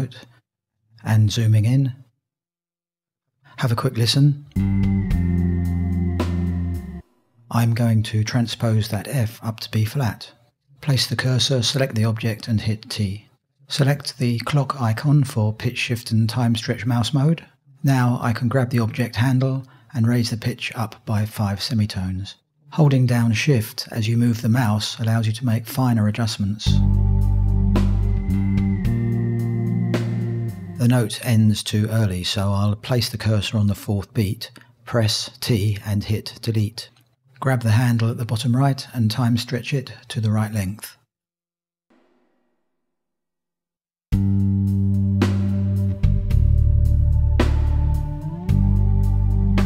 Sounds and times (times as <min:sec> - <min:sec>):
Speech: 0:00.0 - 0:00.4, 0:01.0 - 0:02.1, 0:03.5 - 0:04.5, 0:07.5 - 0:26.9, 0:30.8 - 0:41.1
Music: 0:04.5 - 0:07.3, 0:26.7 - 0:30.9, 0:44.1 - 0:49.6.